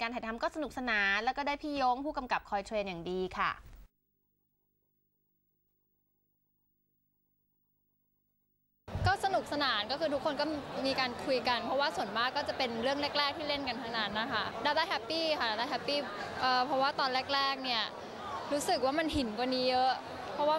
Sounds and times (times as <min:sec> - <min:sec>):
Inside, public space: 0:00.0 - 0:03.5, 0:08.9 - 0:20.5.